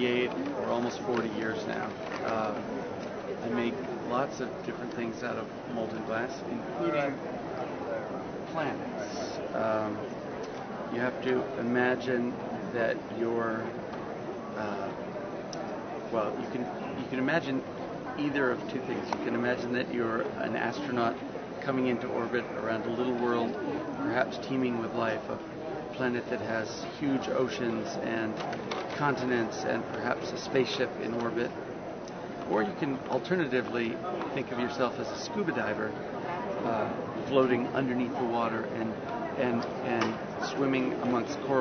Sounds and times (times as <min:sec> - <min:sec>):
Speech: 0:00.0 - 0:02.7, 0:03.4 - 0:07.2, 0:08.5 - 0:10.0, 0:14.6 - 0:15.0, 0:16.1 - 0:25.4, 0:26.0 - 0:28.4, 0:29.0 - 0:31.5, 0:32.5 - 0:36.0, 0:36.6 - 0:41.6.